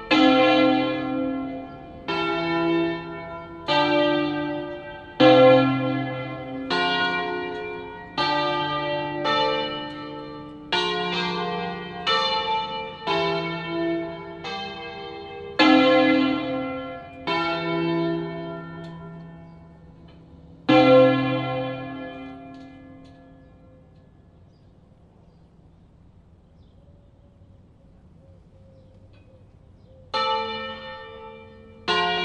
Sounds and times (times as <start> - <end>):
Church bell: 0.0 - 24.9, 30.1 - 32.2.